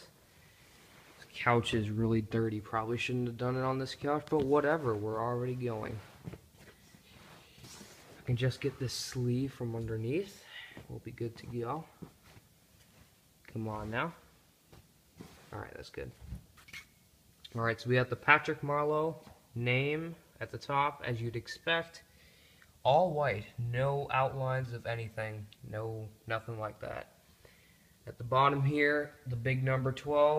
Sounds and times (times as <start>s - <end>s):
Inside, small room: 0.0s - 30.3s
Speech: 1.2s - 6.1s, 8.2s - 12.0s, 13.5s - 14.3s, 15.5s - 16.3s, 17.5s - 22.1s, 22.8s - 27.2s, 28.0s - 30.3s.